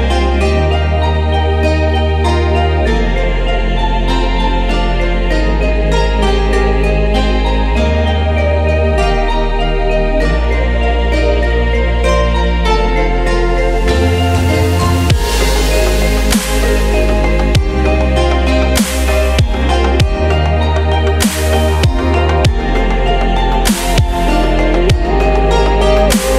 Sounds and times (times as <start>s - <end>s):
Music: 0.0s - 26.3s.